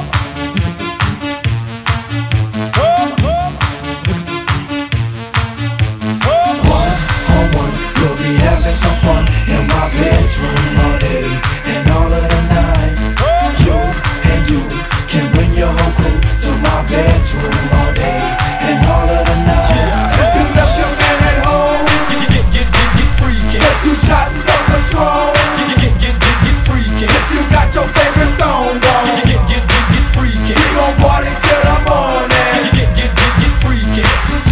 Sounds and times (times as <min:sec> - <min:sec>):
Music: 0:00.0 - 0:34.5.